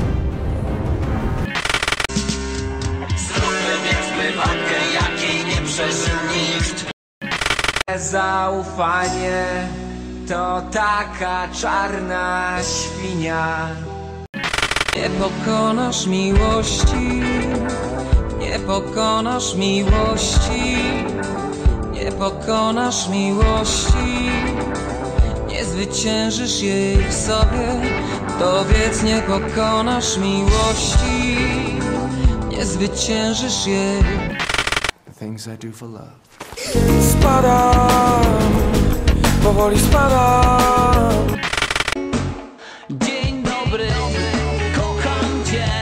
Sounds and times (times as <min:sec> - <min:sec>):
Music: 0:00.0 - 0:07.0, 0:07.9 - 0:34.4, 0:36.7 - 0:45.8
Speech: 0:35.1 - 0:36.2.